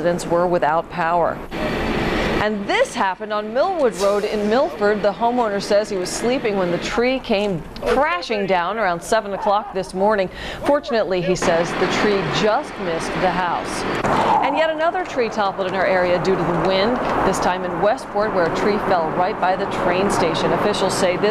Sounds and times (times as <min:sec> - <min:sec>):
Speech: 0:00.0 - 0:01.4, 0:02.4 - 0:21.3.